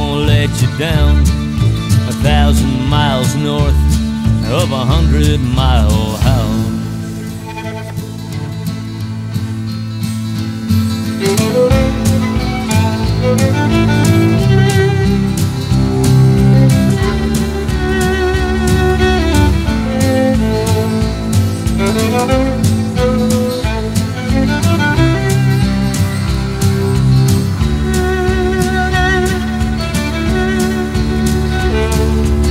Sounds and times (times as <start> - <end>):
Music: 0.0 - 32.5.